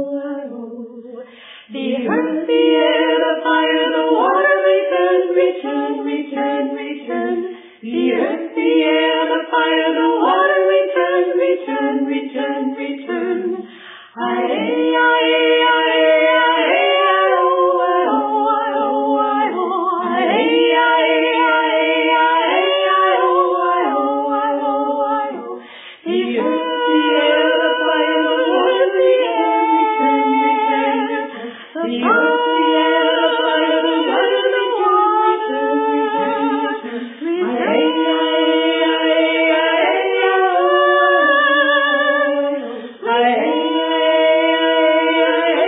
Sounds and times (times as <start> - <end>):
Choir: 0.0 - 45.6
Female singing: 0.0 - 45.6.